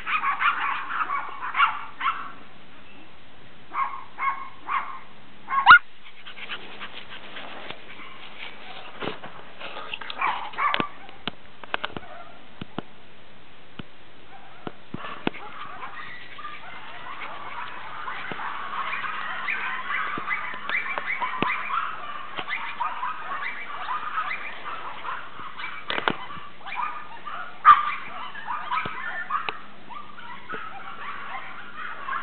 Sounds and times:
Bark: 0.0s - 2.4s, 3.7s - 5.8s, 7.9s - 8.9s, 10.0s - 11.3s, 12.0s - 12.4s, 14.3s - 32.2s.

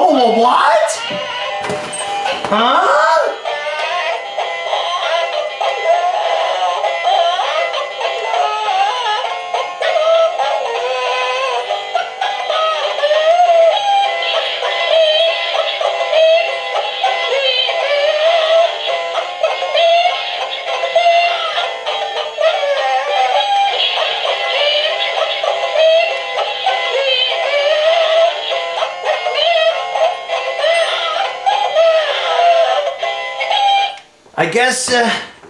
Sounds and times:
Music: 0.0s - 34.1s.

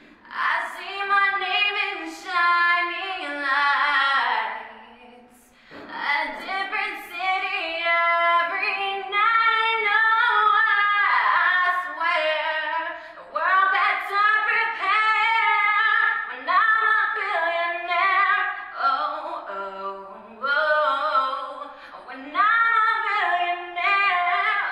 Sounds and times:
Female singing: 0.2s - 24.7s.

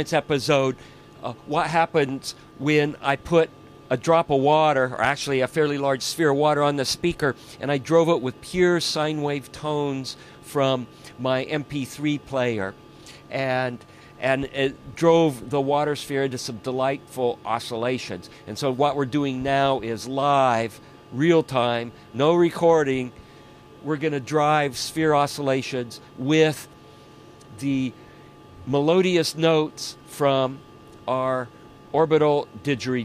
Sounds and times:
Speech: 0.0s - 23.2s, 23.8s - 26.7s, 27.5s - 28.0s, 28.6s - 33.0s.

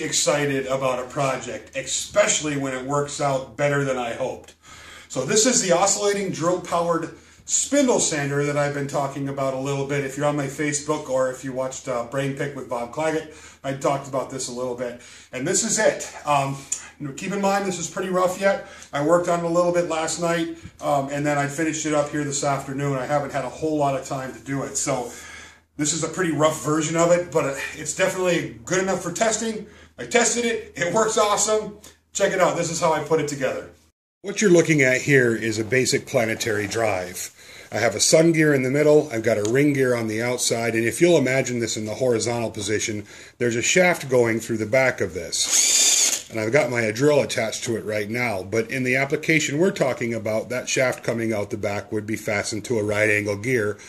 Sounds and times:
Speech: 0.0s - 25.2s, 25.8s - 45.5s, 46.3s - 53.8s.

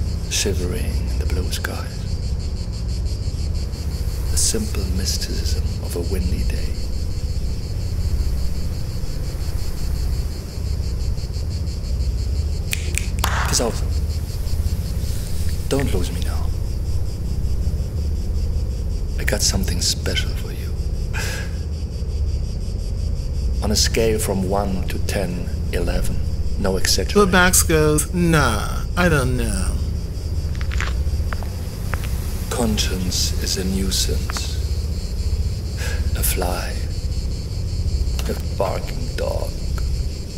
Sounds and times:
Male speech, man speaking: 0.3s - 2.0s, 4.3s - 6.8s, 13.2s - 13.9s, 15.6s - 16.5s, 19.2s - 20.8s, 23.6s - 29.8s, 32.5s - 34.6s, 36.0s - 36.9s, 38.2s - 39.6s.

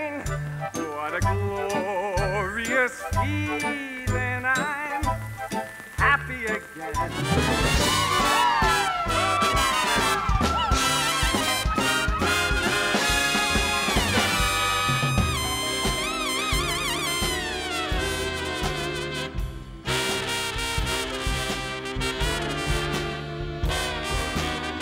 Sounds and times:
Music: 0.0s - 24.8s.

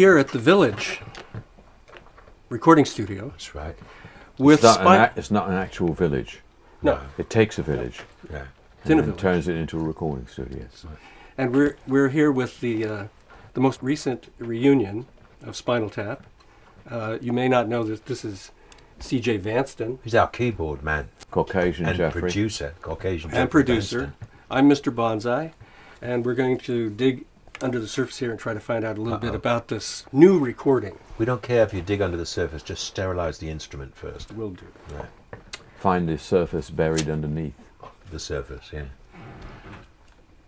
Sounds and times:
Speech: 0.0s - 1.0s, 2.5s - 3.8s, 4.4s - 16.2s, 16.9s - 35.1s, 35.8s - 39.0s.

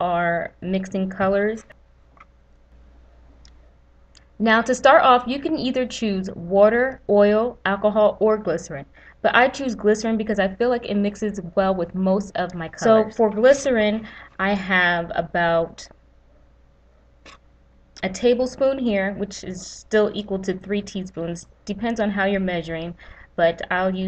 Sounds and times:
Speech: 0.0s - 1.8s, 4.4s - 15.9s, 18.0s - 24.0s.

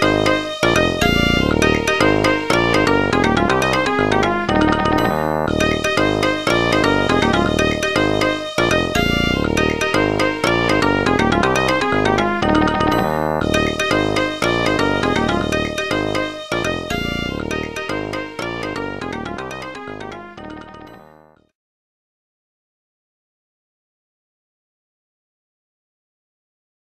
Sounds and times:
Video game music: 0.0s - 21.5s.

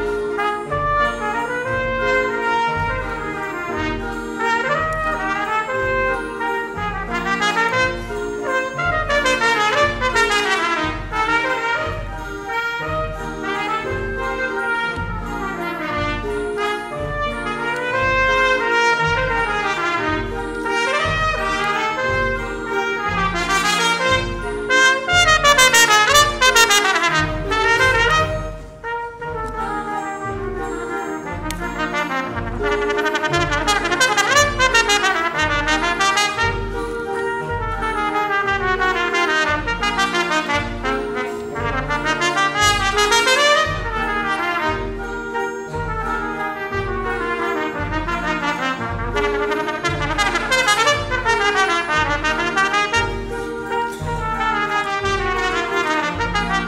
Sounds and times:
Classical music: 0.0s - 56.6s
Orchestra: 0.0s - 56.6s
Trumpet: 0.0s - 56.6s.

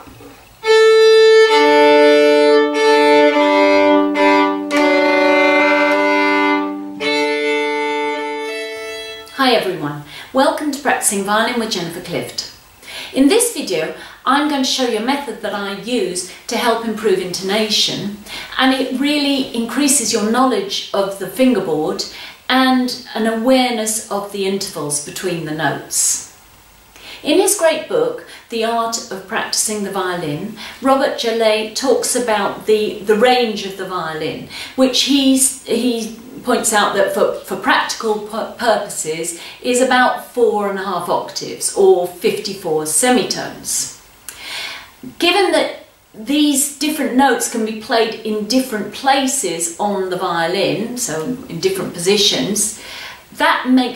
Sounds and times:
Speech: 9.4s - 12.5s, 13.1s - 26.3s, 27.2s - 44.0s, 45.0s - 52.8s, 53.4s - 53.9s.

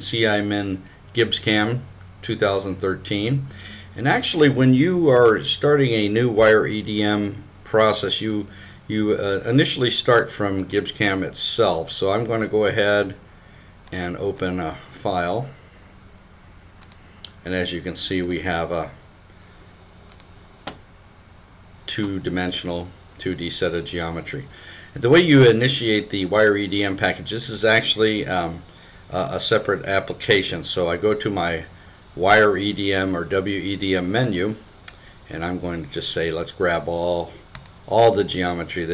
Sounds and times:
Speech: 0.0s - 13.2s, 13.9s - 15.6s, 17.4s - 19.0s, 21.9s - 34.6s, 35.3s - 38.9s.

